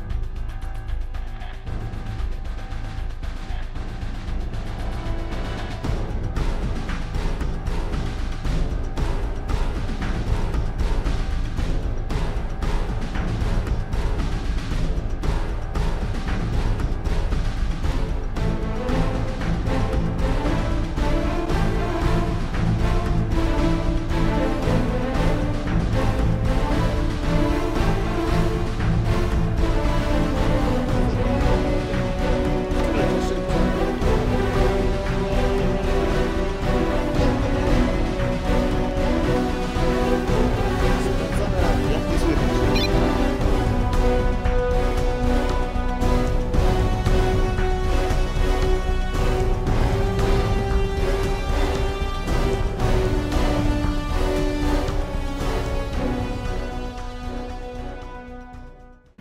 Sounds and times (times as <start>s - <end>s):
Music: 0.0s - 59.2s
Speech: 32.8s - 33.8s, 40.9s - 43.0s.